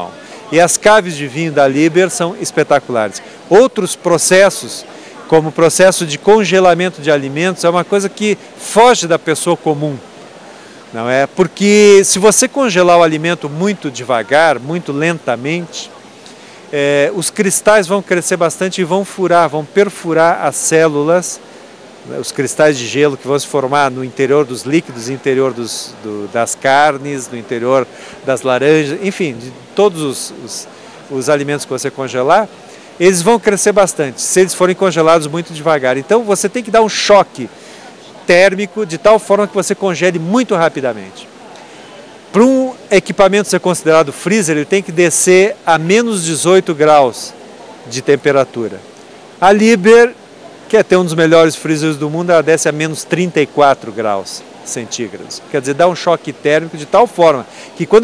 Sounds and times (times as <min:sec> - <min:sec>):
Speech: 0:00.0 - 0:10.0, 0:10.9 - 0:16.0, 0:16.7 - 0:21.4, 0:22.1 - 0:37.5, 0:38.2 - 0:41.3, 0:42.3 - 0:48.8, 0:49.4 - 0:58.0.